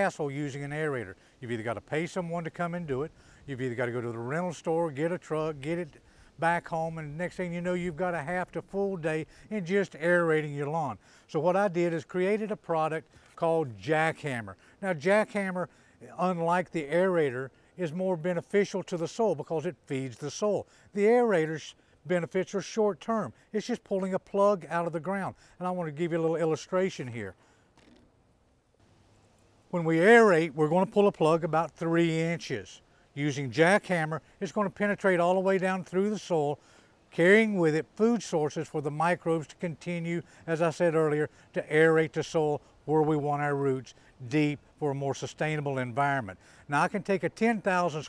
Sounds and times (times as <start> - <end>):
Speech: 0.0 - 27.4, 29.7 - 48.0.